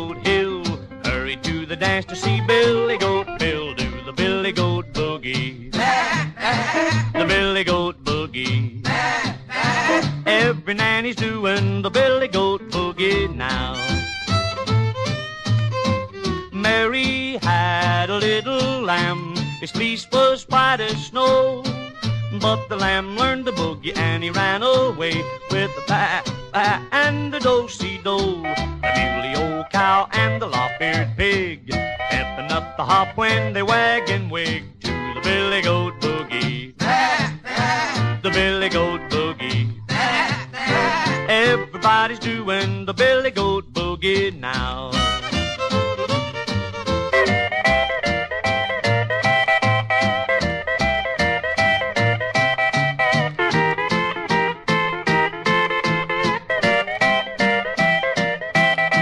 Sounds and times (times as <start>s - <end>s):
Music: 0.0s - 59.0s
Bleat: 5.9s - 7.1s.